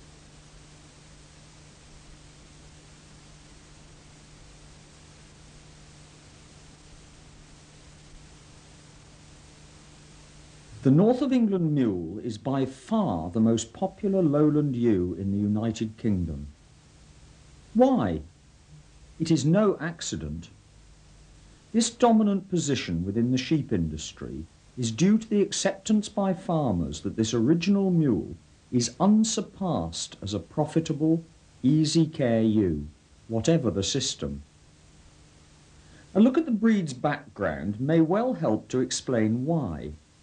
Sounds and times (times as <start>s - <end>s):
Speech: 10.8s - 16.6s, 17.8s - 18.3s, 19.2s - 20.6s, 21.7s - 34.5s, 36.1s - 40.0s.